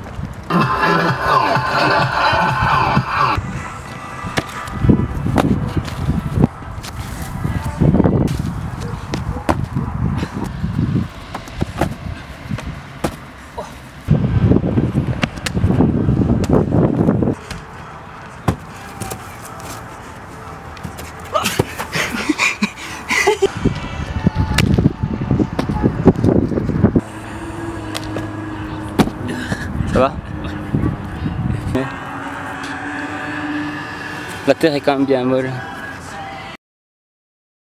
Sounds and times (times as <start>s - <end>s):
Outside, urban or manmade: 0.0s - 36.6s
Speech: 34.5s - 35.6s.